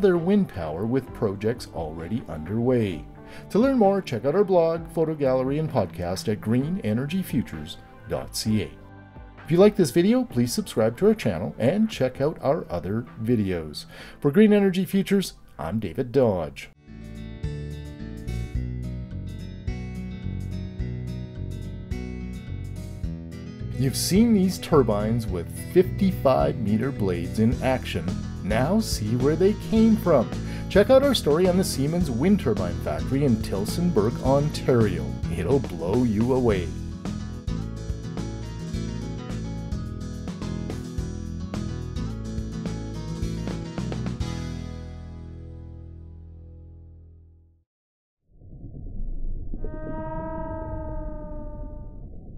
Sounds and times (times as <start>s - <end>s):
Music: 0.0s - 47.6s
Whale vocalization: 49.5s - 52.3s.